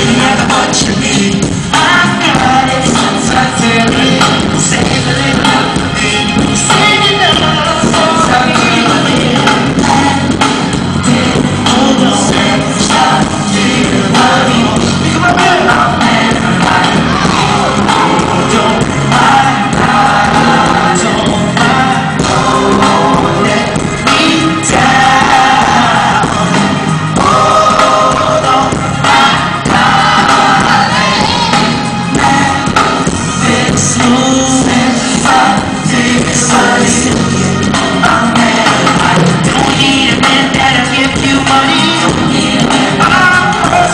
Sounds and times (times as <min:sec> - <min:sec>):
Singing: 0:00.0 - 0:43.9
Vocal music: 0:00.0 - 0:43.9.